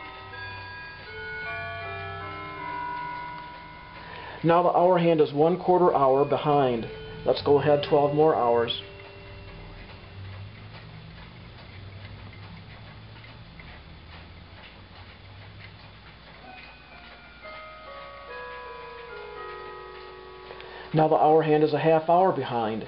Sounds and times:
Speech: 0:04.5 - 0:08.8, 0:21.0 - 0:22.8
Tick: 0:09.0 - 0:19.3.

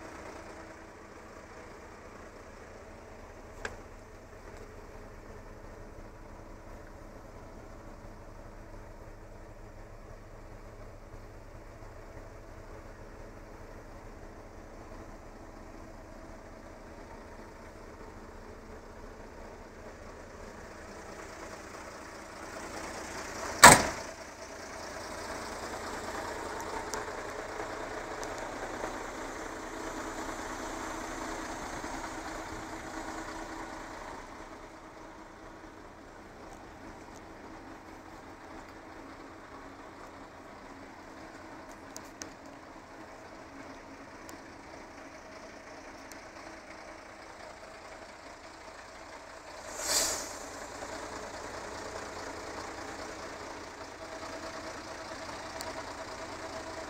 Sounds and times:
Truck: 0:00.0 - 0:56.8.

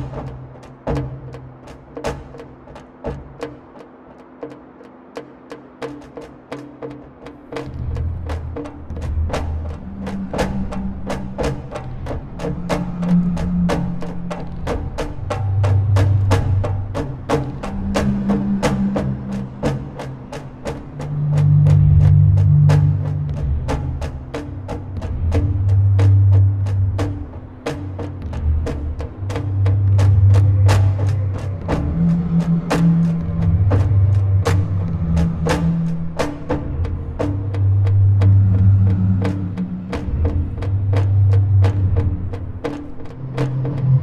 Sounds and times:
Music: 0:00.0 - 0:44.0.

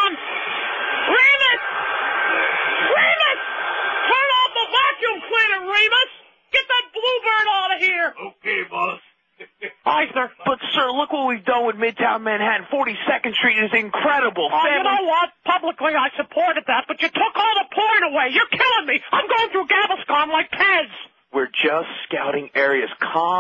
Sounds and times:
Speech: 0:01.1 - 0:01.6, 0:02.9 - 0:03.4, 0:04.1 - 0:23.4.

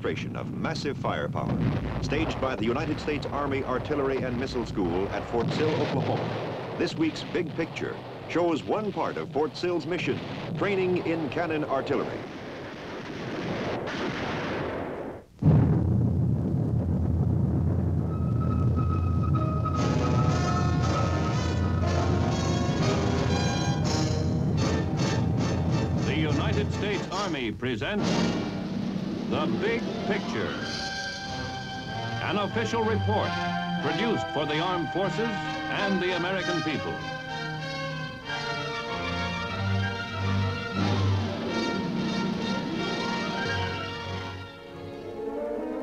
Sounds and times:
Speech: 0:00.0 - 0:06.2, 0:06.8 - 0:12.2, 0:26.1 - 0:28.1, 0:29.3 - 0:30.6, 0:32.2 - 0:37.0
Artillery fire: 0:01.4 - 0:27.2, 0:28.0 - 0:31.1
Music: 0:18.1 - 0:27.4, 0:28.0 - 0:45.8.

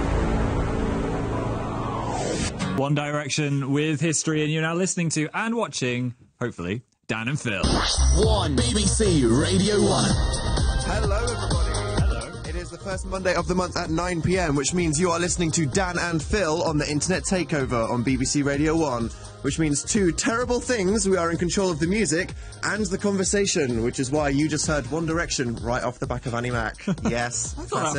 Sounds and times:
Music: 0:00.0 - 0:02.9, 0:07.6 - 0:27.9
Speech: 0:02.8 - 0:10.2, 0:10.9 - 0:27.9.

